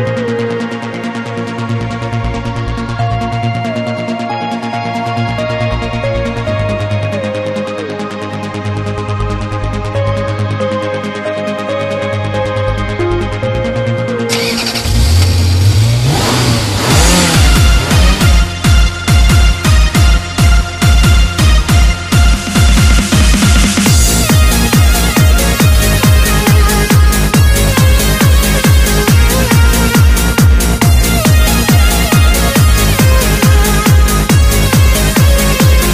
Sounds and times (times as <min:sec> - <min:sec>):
Music: 0:00.0 - 0:35.9
Vehicle: 0:14.2 - 0:20.2
Accelerating, revving, vroom: 0:14.4 - 0:18.5.